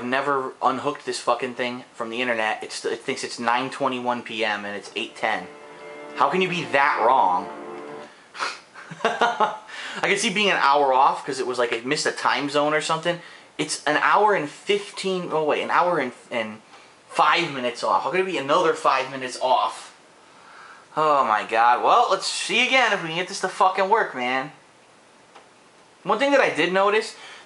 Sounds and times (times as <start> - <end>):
Speech: 0.0 - 5.5, 6.2 - 7.5, 10.0 - 20.0, 21.0 - 24.6, 26.0 - 27.3.